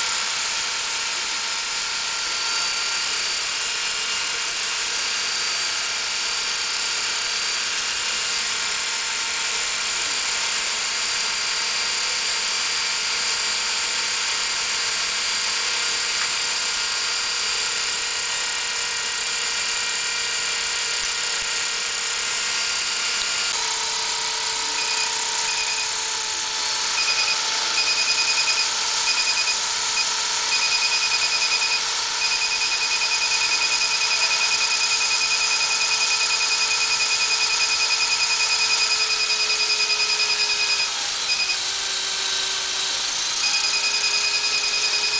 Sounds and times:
Drill: 0:00.0 - 0:45.1.

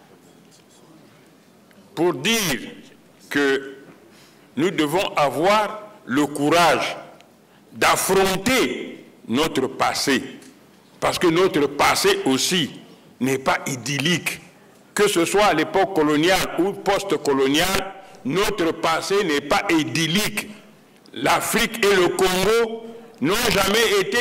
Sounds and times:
Narration, monologue: 0:01.5 - 0:24.2.

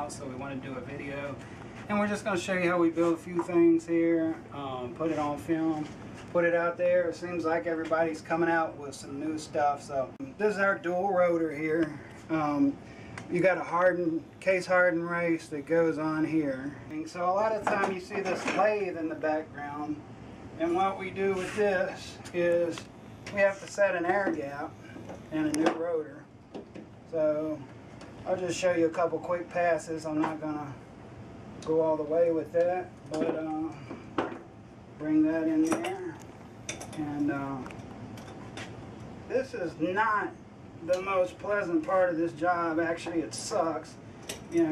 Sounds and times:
Speech: 0:00.0 - 0:20.0, 0:20.6 - 0:26.3, 0:27.1 - 0:30.8, 0:31.6 - 0:33.9, 0:35.0 - 0:36.2, 0:37.0 - 0:37.8, 0:39.3 - 0:44.7.

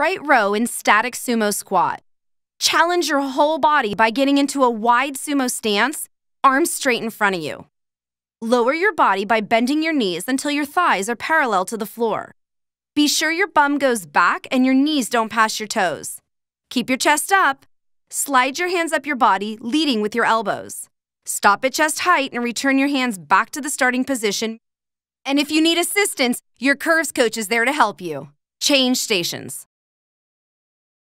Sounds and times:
Speech: 0:00.0 - 0:02.0, 0:02.6 - 0:07.7, 0:08.4 - 0:12.4, 0:13.0 - 0:17.6, 0:18.2 - 0:24.6, 0:25.3 - 0:29.7.

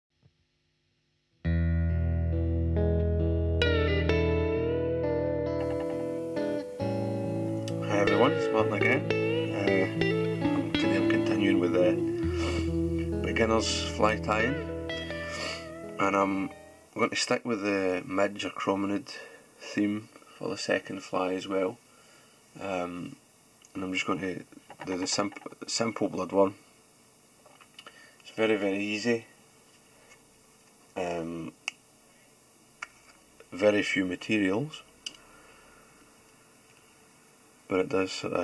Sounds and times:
Music: 0:01.4 - 0:17.0
Speech: 0:07.8 - 0:09.9, 0:10.8 - 0:12.0, 0:13.2 - 0:14.6, 0:16.0 - 0:21.8, 0:22.6 - 0:26.6, 0:28.3 - 0:29.3, 0:31.0 - 0:31.6, 0:33.5 - 0:34.9, 0:37.7 - 0:38.4.

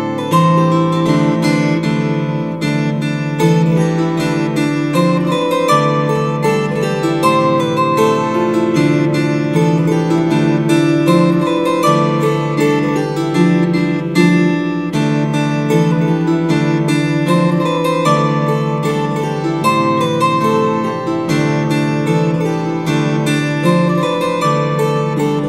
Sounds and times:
Harp: 0:00.0 - 0:25.4
Plucked string instrument: 0:00.0 - 0:25.4.

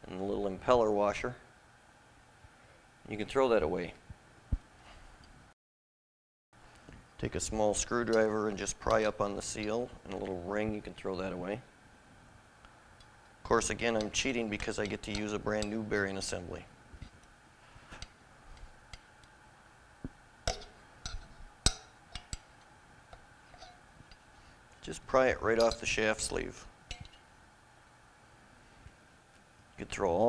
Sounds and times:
Speech: 0:00.0 - 0:01.5, 0:03.1 - 0:04.0, 0:07.2 - 0:11.7, 0:13.4 - 0:16.7, 0:24.8 - 0:26.7, 0:29.8 - 0:30.2.

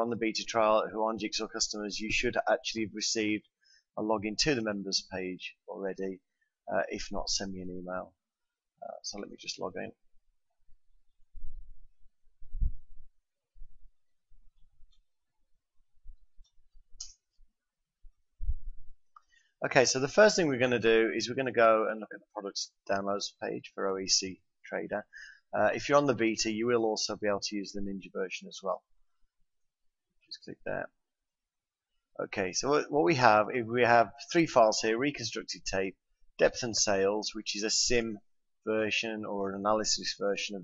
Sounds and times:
Speech: 0:00.0 - 0:08.2, 0:08.8 - 0:10.0, 0:19.6 - 0:28.8, 0:30.3 - 0:30.9, 0:32.2 - 0:40.6.

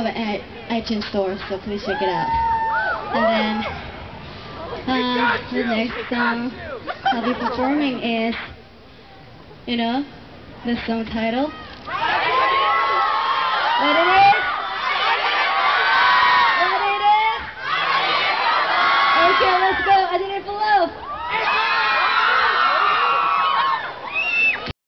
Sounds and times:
Crowd: 0:00.0 - 0:09.6, 0:11.4 - 0:24.7.

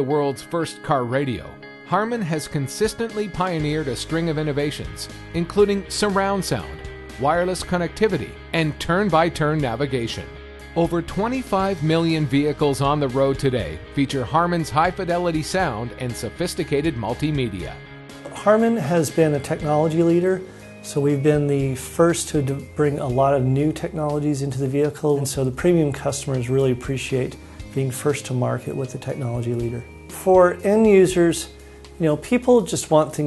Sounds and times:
Music: 0:00.0 - 0:33.2
Speech: 0:00.0 - 0:33.2.

